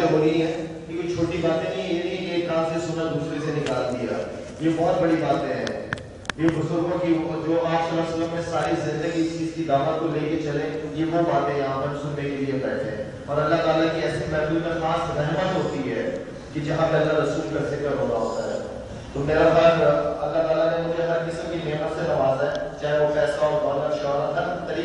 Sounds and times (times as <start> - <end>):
Male speech, man speaking: 0.0 - 24.8
Narration, monologue: 0.0 - 24.8.